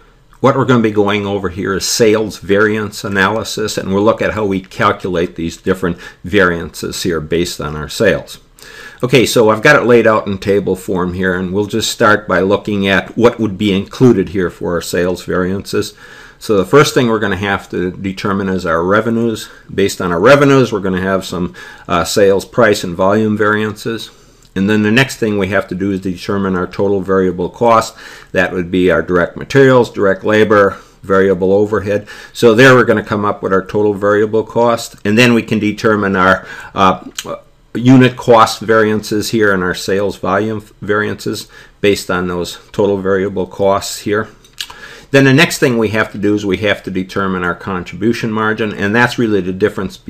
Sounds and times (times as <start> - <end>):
Speech: 0.4 - 44.4, 45.1 - 50.0.